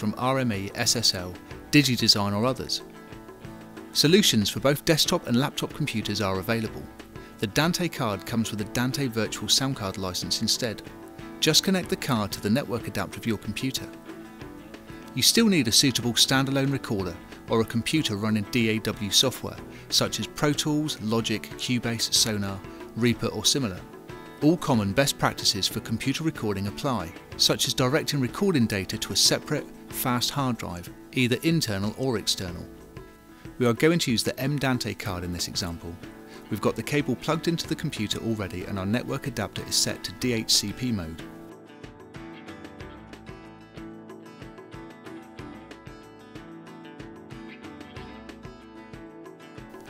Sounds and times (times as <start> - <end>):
Speech: 0.0 - 2.9, 4.0 - 14.0, 15.1 - 32.7, 33.6 - 41.3
Music: 0.0 - 49.8.